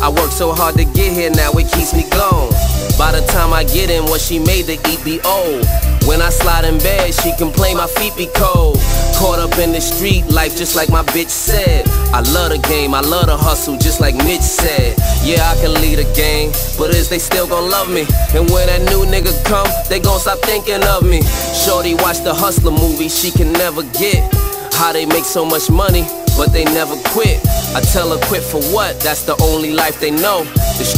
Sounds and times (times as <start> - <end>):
Music: 0.0 - 30.9
Rapping: 0.0 - 30.9.